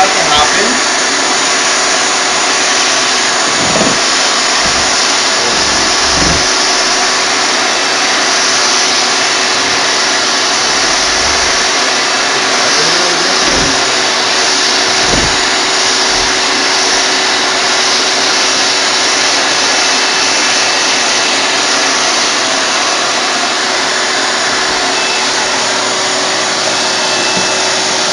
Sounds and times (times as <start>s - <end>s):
Vacuum cleaner: 0.0s - 28.1s.